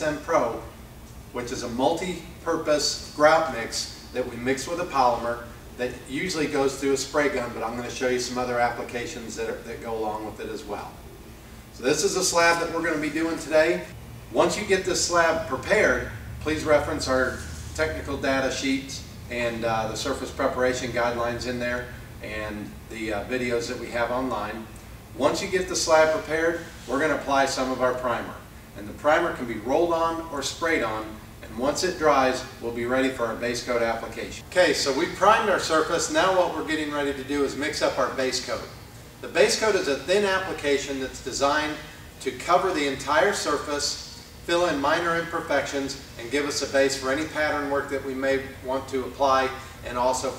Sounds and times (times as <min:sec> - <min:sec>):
Speech: 0:00.0 - 0:00.7, 0:01.4 - 0:11.0, 0:11.8 - 0:50.3.